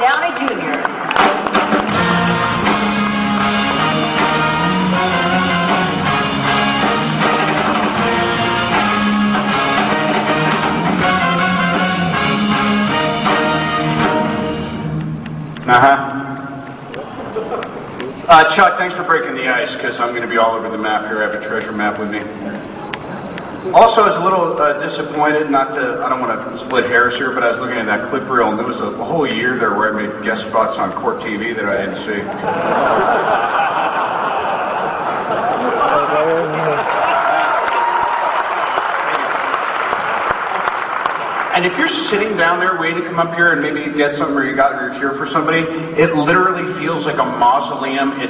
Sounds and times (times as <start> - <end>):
Music: 0.8 - 15.7
Male speech, man speaking: 15.7 - 16.3, 18.3 - 22.3, 23.7 - 32.3, 35.8 - 36.8, 41.5 - 48.2
Narration, monologue: 18.1 - 22.7, 23.7 - 32.4, 41.5 - 48.2.